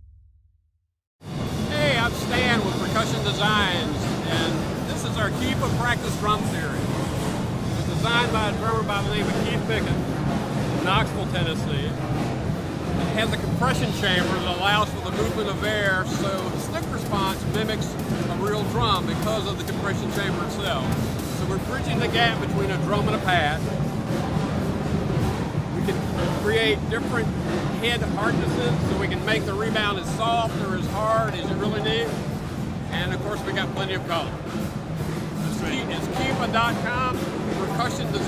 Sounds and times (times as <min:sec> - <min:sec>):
Percussion: 0:01.2 - 0:38.2
Speech: 0:01.7 - 0:06.8, 0:07.9 - 0:10.0, 0:10.8 - 0:12.0, 0:13.2 - 0:23.7, 0:25.8 - 0:32.2, 0:32.9 - 0:34.3, 0:35.5 - 0:38.2.